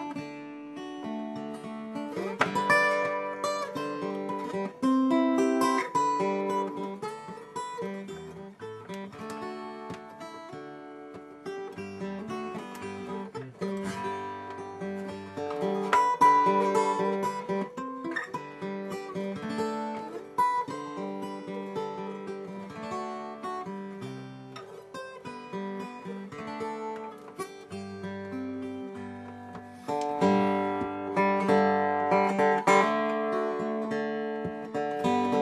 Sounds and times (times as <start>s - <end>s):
Acoustic guitar: 0.0s - 35.4s
Strum: 0.0s - 35.4s.